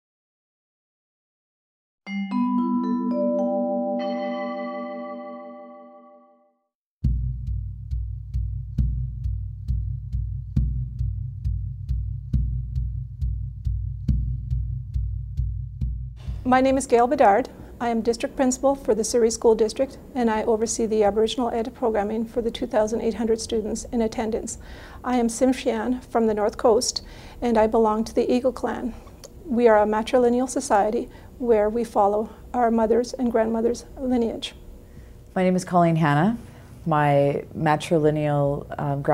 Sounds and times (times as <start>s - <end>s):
Vibraphone: 2.1s - 6.4s.